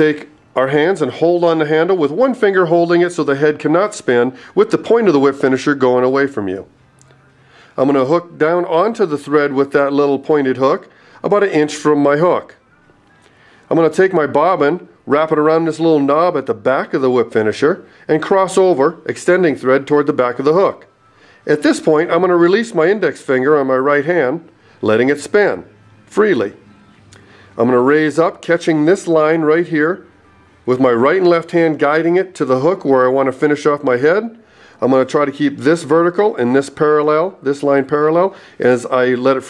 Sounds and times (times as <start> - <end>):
Speech: 0.0 - 6.7, 7.8 - 12.6, 13.7 - 26.6, 27.6 - 30.1, 30.7 - 39.4.